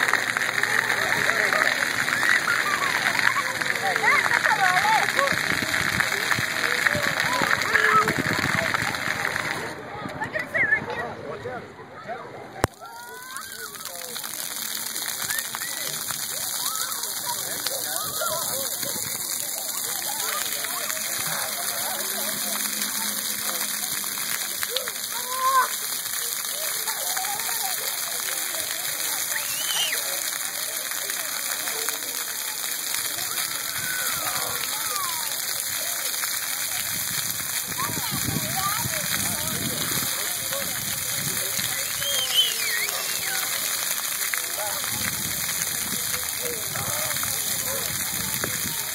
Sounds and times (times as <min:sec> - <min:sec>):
Speech: 0:00.0 - 0:48.9
Water: 0:00.0 - 0:48.9.